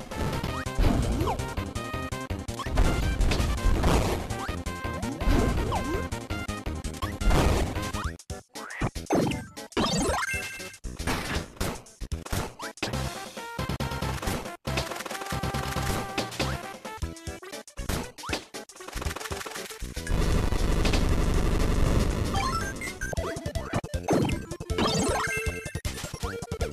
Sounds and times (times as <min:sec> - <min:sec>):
Music: 0:00.0 - 0:26.7.